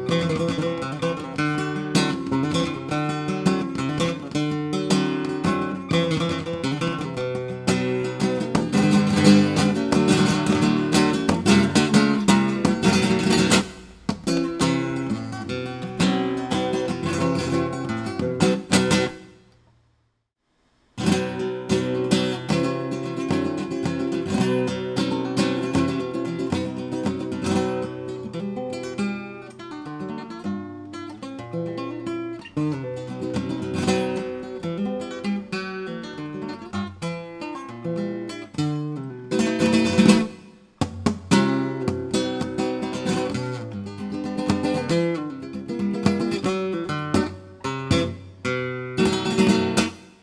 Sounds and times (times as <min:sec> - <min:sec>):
Guitar: 0:00.0 - 0:19.9, 0:20.8 - 0:50.2.